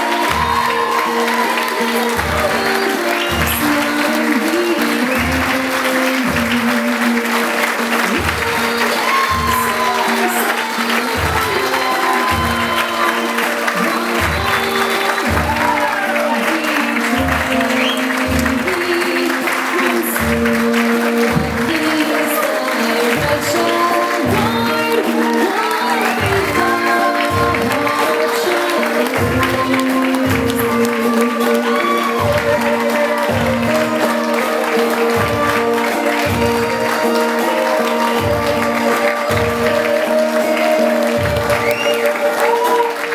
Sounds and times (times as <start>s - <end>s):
Applause: 0.0s - 43.1s
Song: 0.0s - 43.1s.